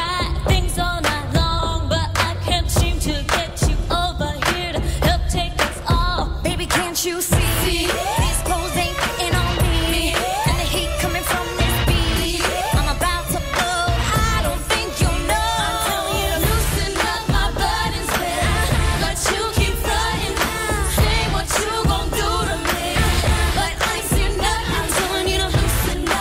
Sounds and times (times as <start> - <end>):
Pop music: 0.0 - 26.2.